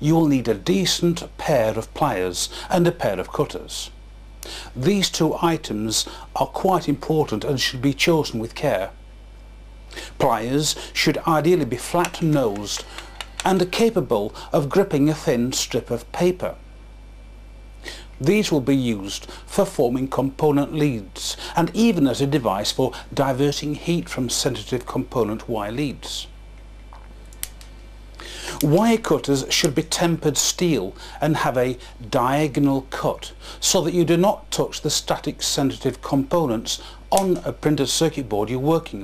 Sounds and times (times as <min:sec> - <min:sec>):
Speech: 0:00.0 - 0:04.0, 0:04.8 - 0:09.0, 0:10.2 - 0:16.6, 0:18.2 - 0:26.4, 0:28.5 - 0:39.0.